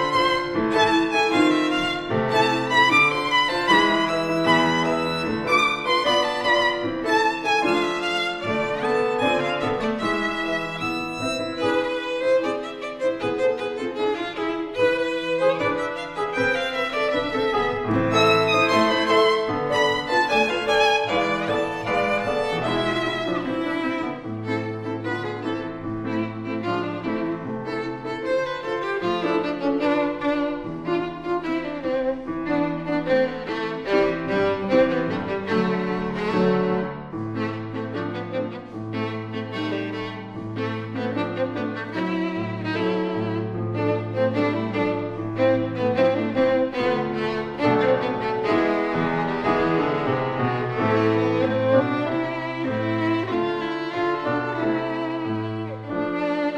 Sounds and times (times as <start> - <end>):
Violin, fiddle: 0.0 - 56.5.